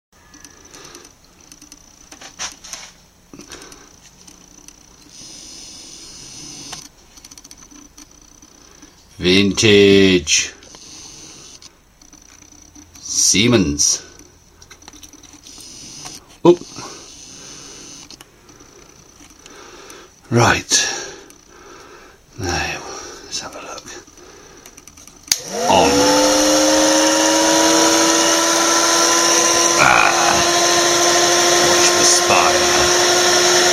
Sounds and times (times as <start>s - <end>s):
Speech: 9.2s - 10.6s, 13.0s - 14.1s, 20.3s - 21.0s, 31.7s - 32.9s.